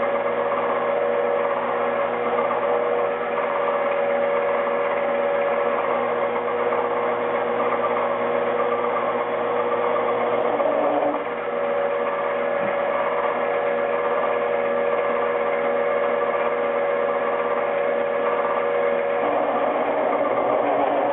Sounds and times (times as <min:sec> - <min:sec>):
Power tool: 0:00.0 - 0:21.1.